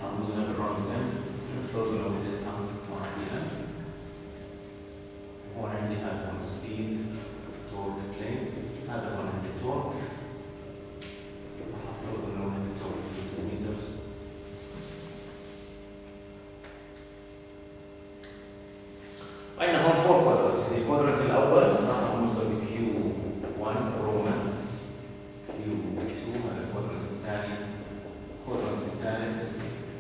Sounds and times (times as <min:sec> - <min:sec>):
Speech: 0:00.0 - 0:03.8, 0:05.5 - 0:10.4, 0:11.6 - 0:14.1, 0:19.6 - 0:24.9, 0:25.5 - 0:30.0.